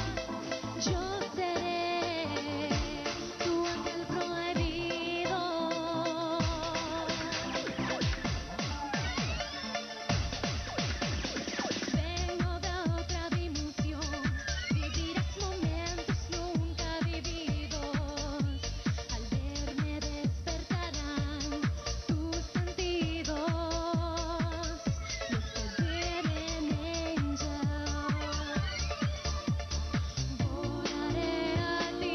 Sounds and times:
Female singing: 0.0 - 7.7, 11.9 - 29.2, 30.3 - 32.1
Music: 0.0 - 32.1.

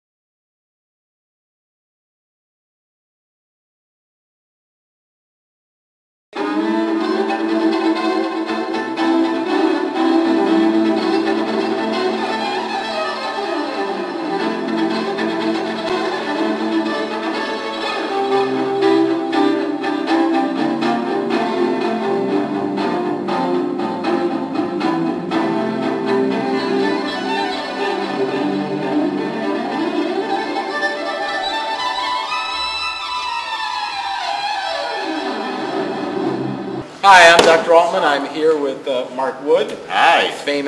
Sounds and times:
Music: 6.4 - 36.9.

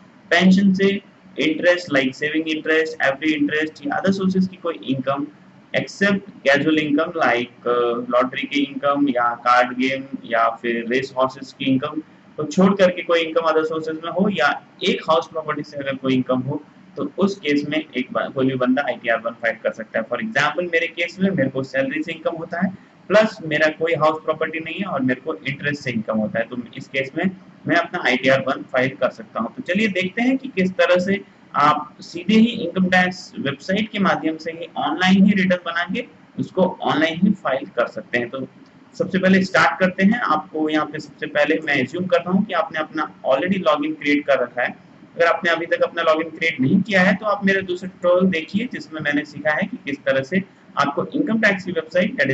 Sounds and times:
Speech: 0.3 - 52.3.

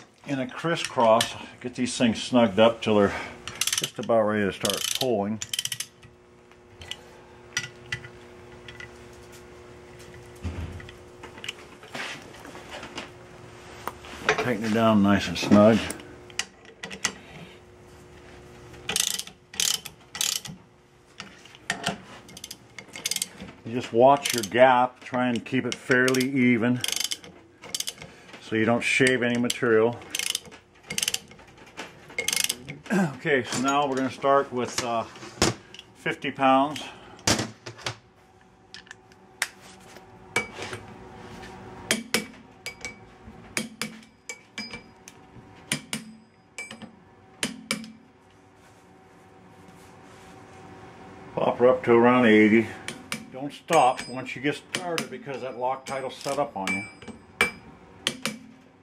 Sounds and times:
Speech: 0.2 - 3.2, 3.8 - 5.4, 14.3 - 15.9, 23.6 - 26.8, 28.4 - 30.0, 32.7 - 35.1, 36.0 - 36.9, 51.4 - 56.9.

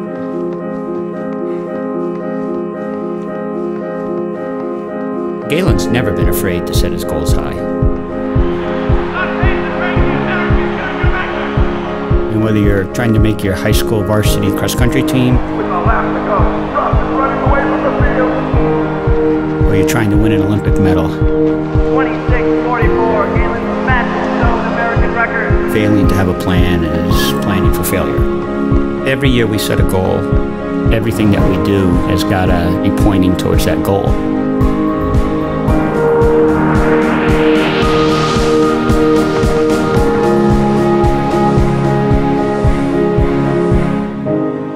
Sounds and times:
Music: 0.0 - 44.7
Speech: 5.5 - 7.7, 9.2 - 11.5, 12.3 - 18.4, 19.7 - 21.2, 22.0 - 28.2, 29.0 - 30.3, 30.9 - 34.2.

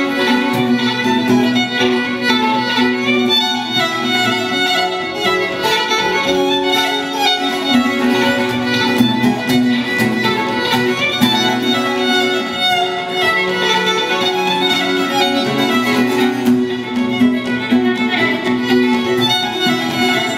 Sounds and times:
Violin, fiddle: 0.0 - 20.3.

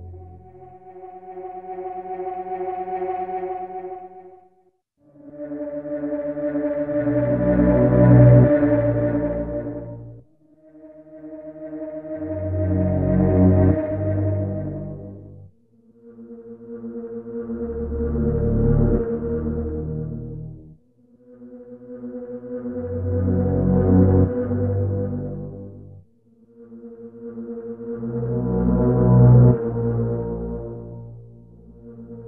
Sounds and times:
Music: 0.0 - 32.2.

